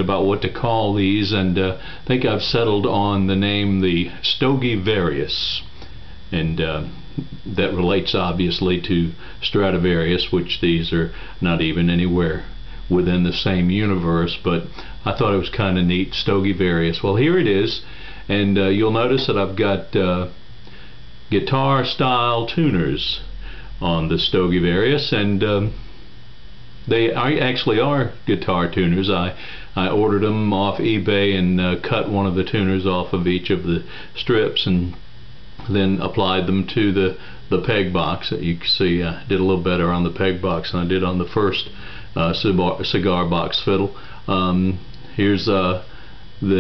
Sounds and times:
Speech: 0.0s - 5.7s, 6.3s - 20.4s, 21.3s - 25.8s, 26.9s - 35.0s, 35.6s - 46.6s.

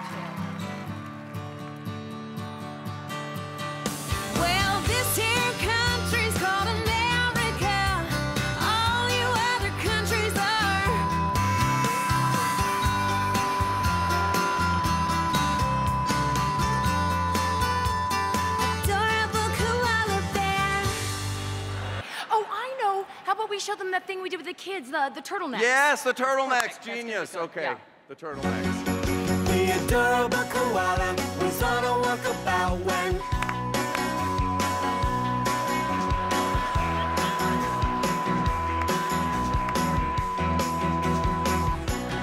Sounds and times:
Music: 0.0s - 22.2s, 28.2s - 42.2s.

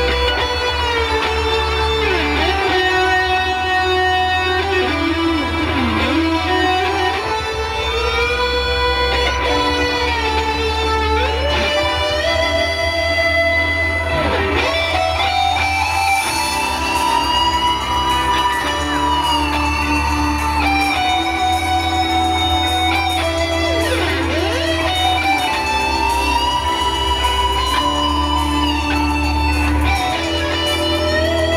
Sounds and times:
Electric guitar: 0.0s - 31.5s.

